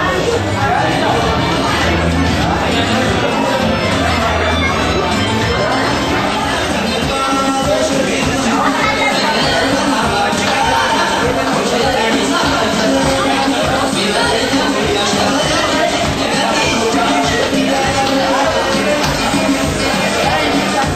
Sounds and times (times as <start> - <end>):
Music: 0.0 - 20.9
Speech: 0.0 - 20.9.